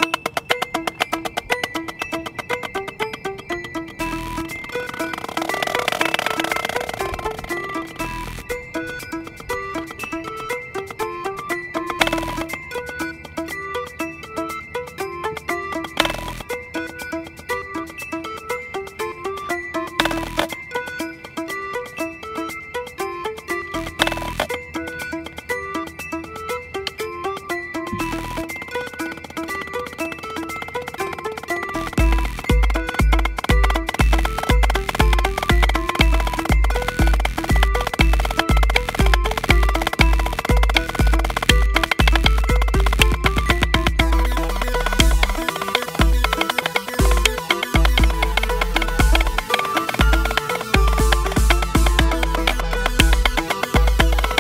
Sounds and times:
Wood block: 0.0 - 14.0, 15.0 - 17.3, 19.7 - 21.1, 23.7 - 25.5, 27.8 - 54.4
Drum: 27.9 - 28.6, 31.9 - 54.4.

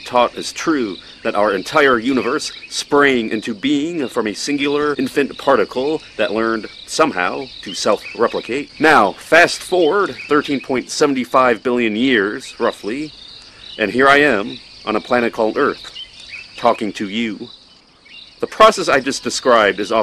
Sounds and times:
Speech: 0.0 - 13.1, 13.8 - 15.9, 16.6 - 17.5, 18.4 - 20.0.

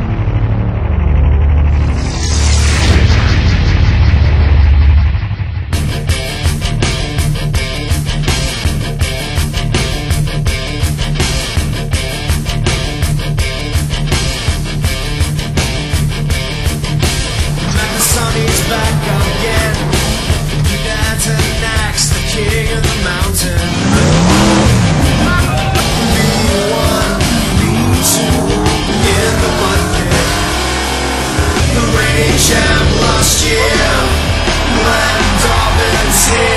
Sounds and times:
Music: 0.0 - 36.5.

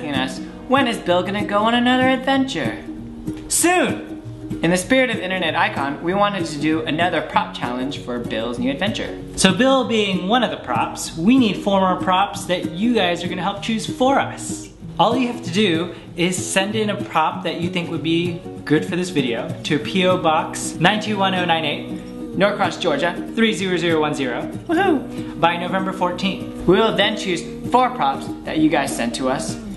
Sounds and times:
Speech: 0.0 - 2.9, 3.5 - 21.8, 22.4 - 29.7
Music: 0.0 - 29.7.

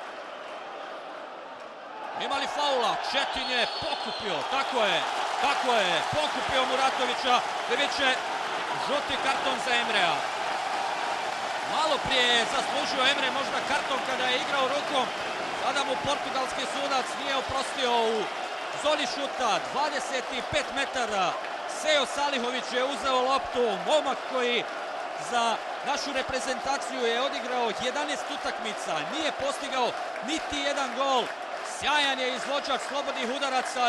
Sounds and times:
Speech: 2.2 - 10.2, 11.7 - 33.8.

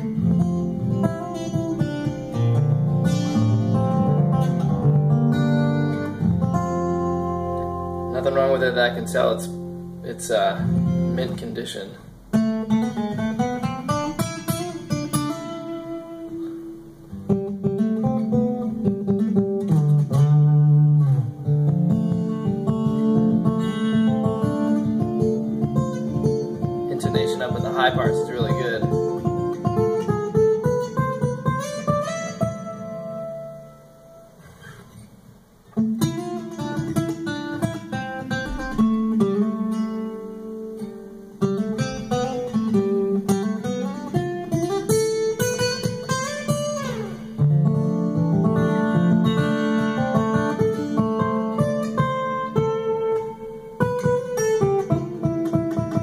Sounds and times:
Acoustic guitar: 0.0 - 56.0
Strum: 0.0 - 56.0.

